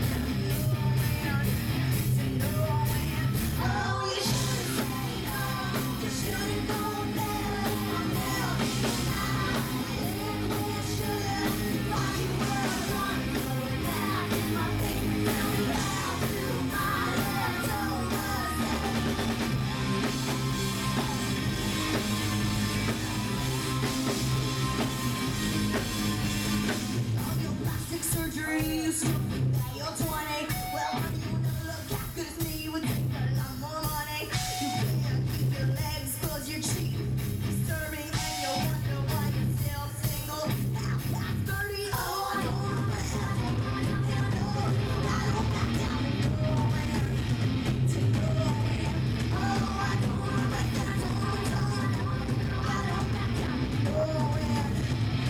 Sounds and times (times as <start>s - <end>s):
Music: 0.0s - 55.2s.